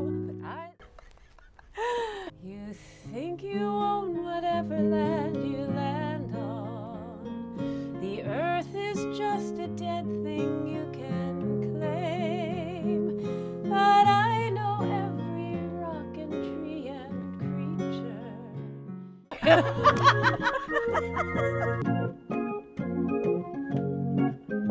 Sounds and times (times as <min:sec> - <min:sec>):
Music: 0:00.0 - 0:00.8, 0:02.3 - 0:24.7.